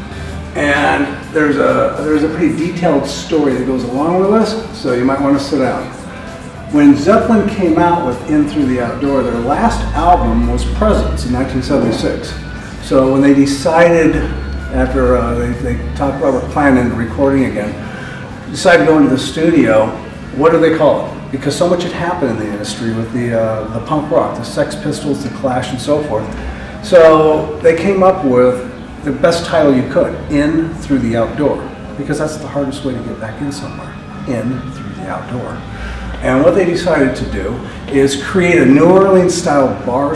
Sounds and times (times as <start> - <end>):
Music: 0.0 - 40.1
Speech: 0.6 - 6.1, 6.7 - 17.9, 18.5 - 40.1.